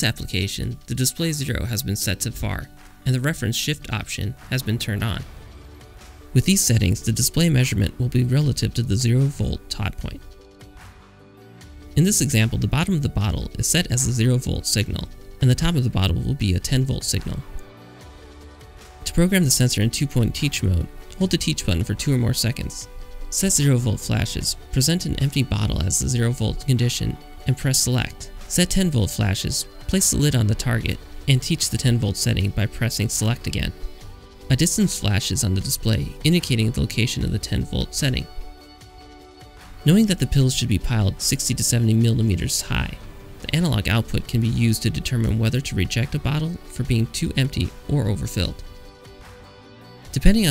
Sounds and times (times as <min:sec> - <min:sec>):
Speech: 0:00.0 - 0:05.3, 0:06.4 - 0:10.3, 0:12.0 - 0:17.6, 0:19.0 - 0:33.8, 0:34.5 - 0:38.4, 0:39.8 - 0:48.7, 0:50.1 - 0:50.5
Music: 0:00.0 - 0:50.5.